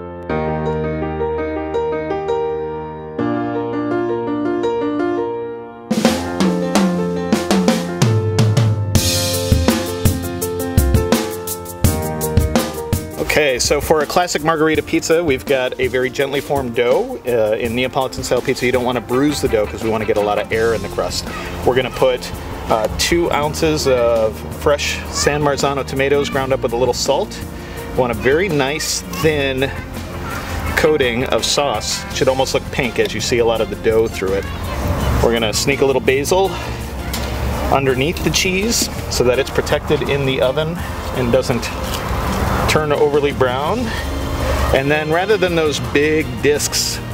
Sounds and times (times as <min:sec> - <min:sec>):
Music: 0:00.0 - 0:47.1
Speech: 0:13.2 - 0:27.4, 0:28.0 - 0:36.6, 0:37.7 - 0:41.8, 0:42.7 - 0:44.0, 0:44.7 - 0:47.0.